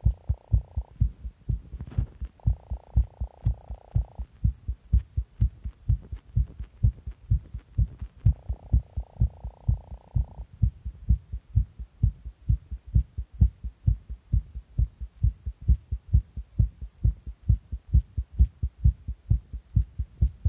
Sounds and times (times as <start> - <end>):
Heart sounds, heartbeat: 0.0 - 20.4
Hum: 0.0 - 20.4.